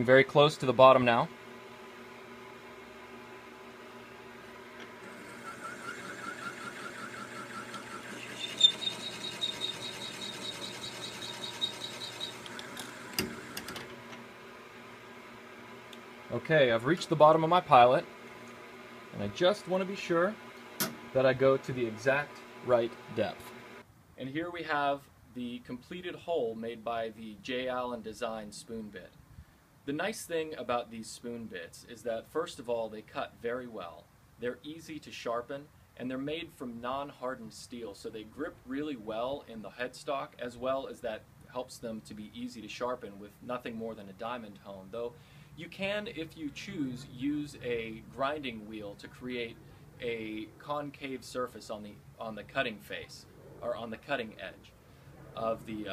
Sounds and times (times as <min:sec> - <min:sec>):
Speech: 0:00.0 - 0:01.3, 0:16.3 - 0:18.1, 0:19.1 - 0:20.4, 0:21.2 - 0:23.5, 0:24.2 - 0:29.2, 0:29.9 - 0:54.8, 0:55.4 - 0:55.9.